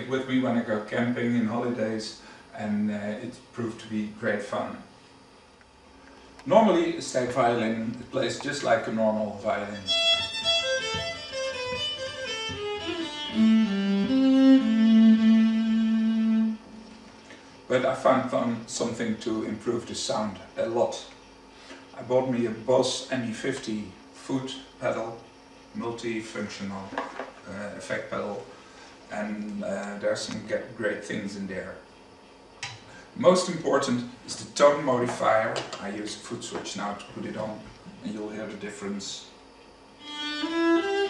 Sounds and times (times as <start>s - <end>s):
Speech: 0.0s - 4.9s, 6.5s - 9.9s, 17.7s - 21.2s, 22.0s - 28.5s, 29.1s - 31.9s, 33.2s - 39.4s
Music: 9.8s - 16.8s, 40.0s - 41.1s.